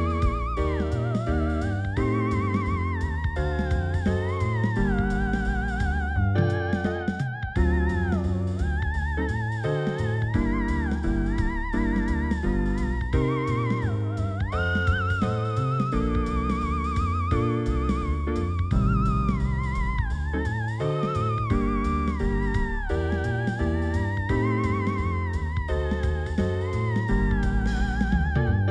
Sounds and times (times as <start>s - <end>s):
Electric piano: 0.0s - 28.7s.